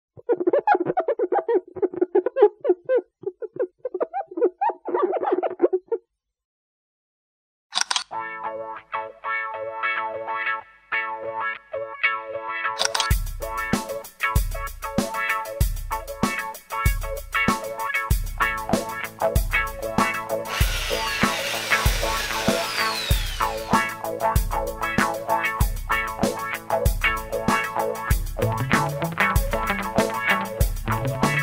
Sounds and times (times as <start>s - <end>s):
Music: 8.1s - 31.4s.